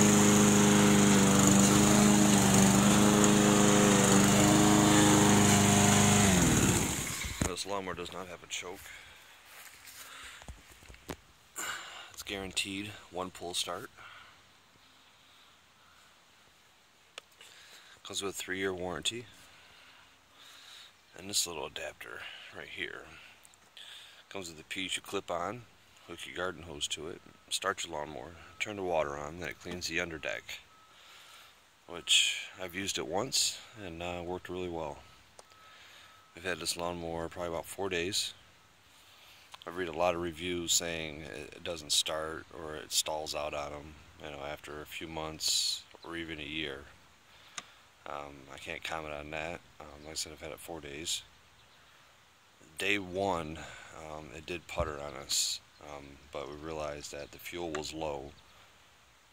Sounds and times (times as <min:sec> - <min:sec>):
Vehicle: 0:00.0 - 0:10.4, 0:19.1 - 0:58.8
Speech: 0:07.5 - 0:09.0, 0:12.2 - 0:14.0, 0:18.0 - 0:19.3, 0:21.1 - 0:23.2, 0:24.3 - 0:30.6, 0:31.9 - 0:35.0, 0:36.4 - 0:38.4, 0:39.6 - 0:47.0, 0:48.0 - 0:51.3, 0:52.7 - 0:58.4.